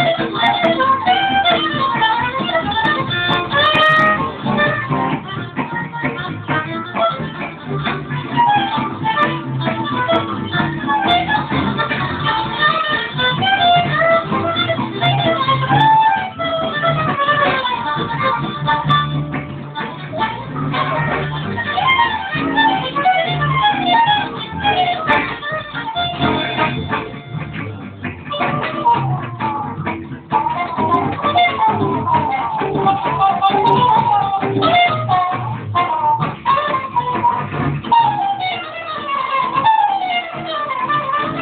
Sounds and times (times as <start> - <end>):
Violin, fiddle: 0.0 - 41.4.